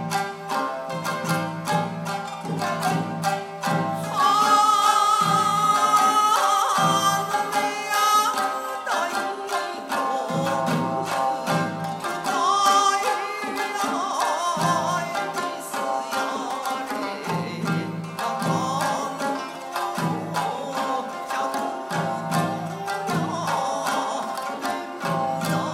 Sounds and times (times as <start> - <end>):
Musical instrument: 0.0 - 25.7.